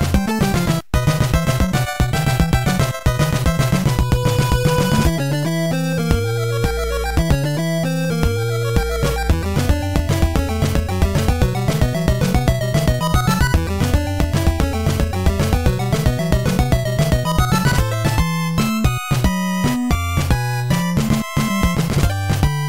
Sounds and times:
Video game music: 0:00.0 - 0:22.6.

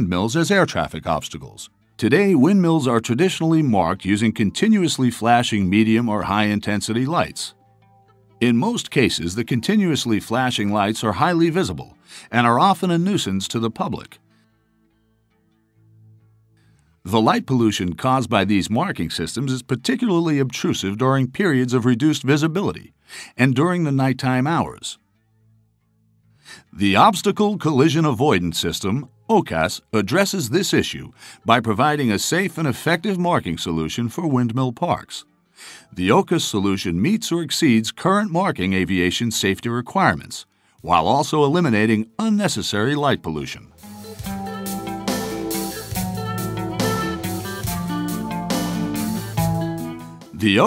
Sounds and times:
Speech: 0:00.0 - 0:07.5, 0:08.4 - 0:14.2, 0:17.1 - 0:25.0, 0:26.5 - 0:35.2, 0:35.9 - 0:43.7, 0:50.4 - 0:50.6.

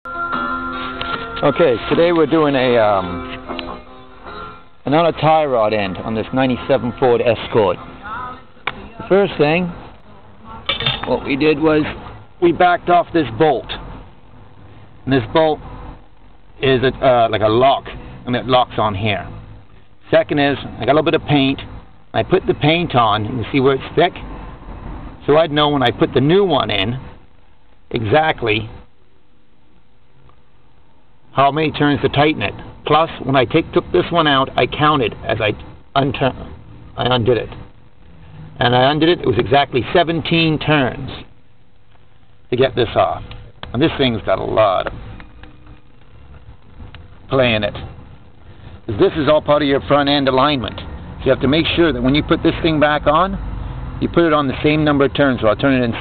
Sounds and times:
Speech: 0:01.4 - 0:03.2, 0:04.9 - 0:13.8, 0:15.1 - 0:15.6, 0:16.6 - 0:19.3, 0:20.1 - 0:24.2, 0:25.2 - 0:27.0, 0:27.9 - 0:28.8, 0:31.3 - 0:36.4, 0:37.0 - 0:37.6, 0:38.6 - 0:41.3, 0:42.5 - 0:44.9, 0:47.3 - 0:47.8, 0:48.9 - 0:53.4, 0:54.0 - 0:56.0.

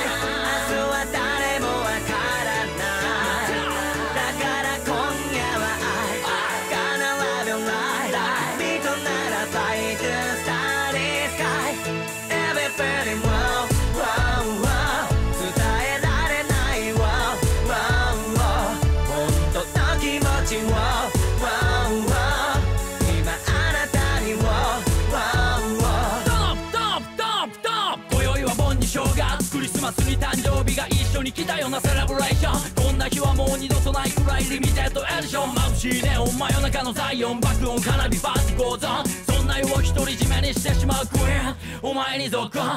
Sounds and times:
Music: 0:00.0 - 0:42.7.

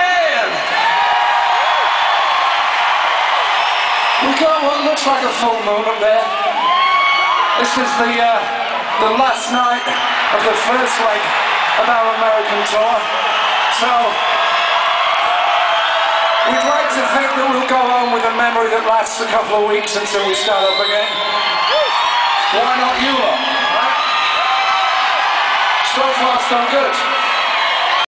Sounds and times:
Male speech, man speaking: 0:00.0 - 0:00.6, 0:04.2 - 0:06.4, 0:07.6 - 0:13.1, 0:13.7 - 0:14.2, 0:16.4 - 0:21.3, 0:22.5 - 0:24.0, 0:25.8 - 0:27.1.

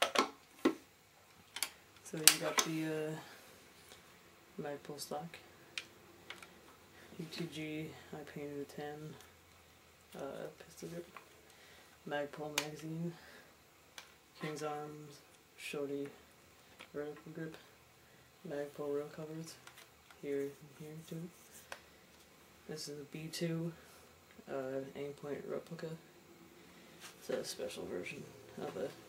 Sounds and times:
Speech: 0:02.1 - 0:03.4, 0:04.6 - 0:05.4, 0:07.2 - 0:09.2, 0:10.2 - 0:11.1, 0:12.1 - 0:13.3, 0:14.4 - 0:16.2, 0:16.9 - 0:17.7, 0:18.5 - 0:19.6, 0:20.2 - 0:21.4, 0:22.7 - 0:23.8, 0:24.5 - 0:26.1, 0:27.2 - 0:29.0.

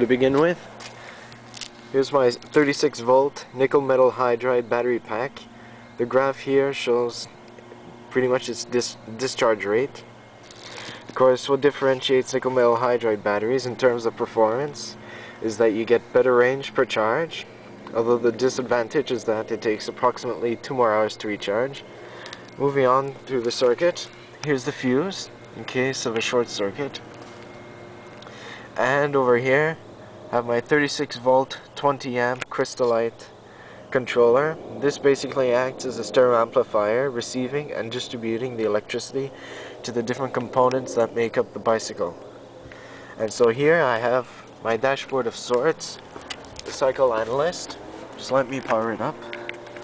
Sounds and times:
Speech: 0:00.0 - 0:00.6, 0:01.9 - 0:07.4, 0:08.1 - 0:10.1, 0:11.1 - 0:21.8, 0:22.6 - 0:27.0, 0:28.8 - 0:42.2, 0:43.2 - 0:46.0, 0:46.6 - 0:49.3.

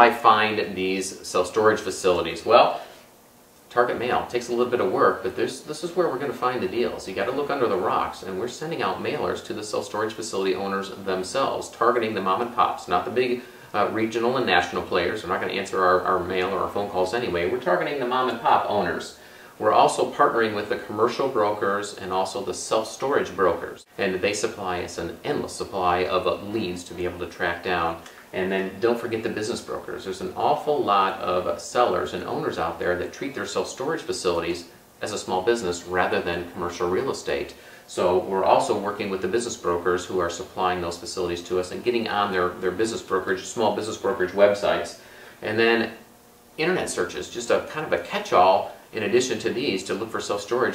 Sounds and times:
Speech: 0:00.0 - 0:02.9, 0:03.7 - 0:50.7
Inside, small room: 0:00.0 - 0:50.7.

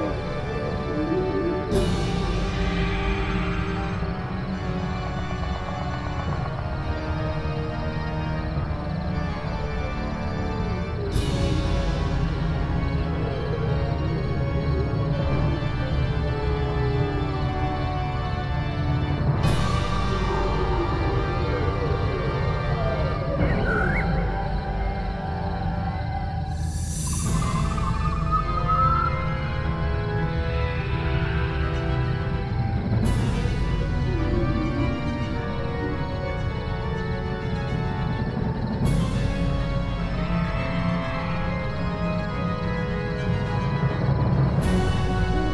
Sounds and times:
Scary music: 0:00.0 - 0:45.5.

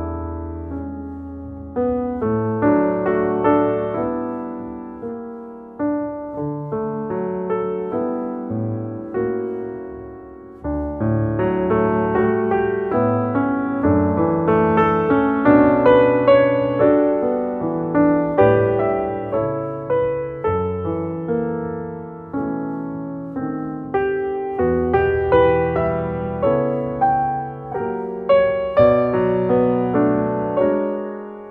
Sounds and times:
Music: 0:00.0 - 0:31.5.

